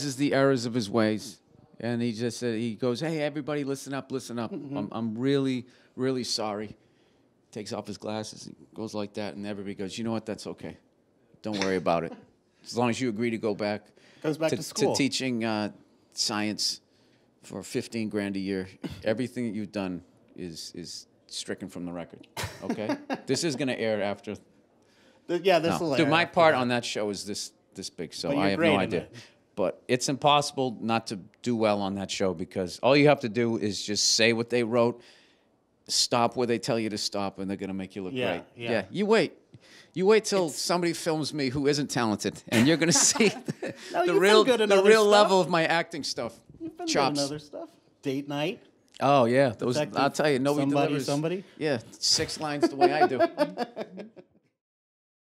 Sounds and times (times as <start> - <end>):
Speech: 11.5 - 16.8, 25.3 - 35.0, 35.9 - 39.4, 40.0 - 53.5.